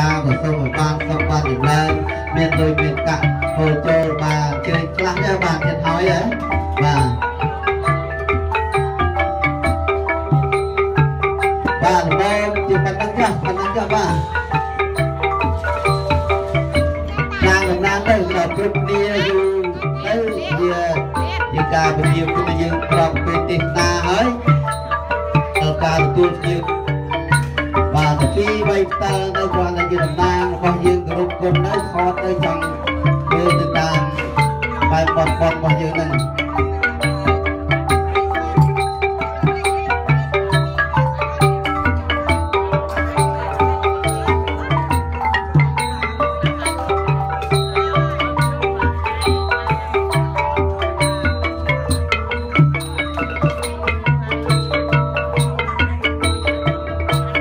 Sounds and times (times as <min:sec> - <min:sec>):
Speech: 0:00.0 - 0:07.2, 0:11.8 - 0:14.4, 0:17.1 - 0:24.5, 0:27.9 - 0:37.4
Music: 0:00.0 - 0:57.4.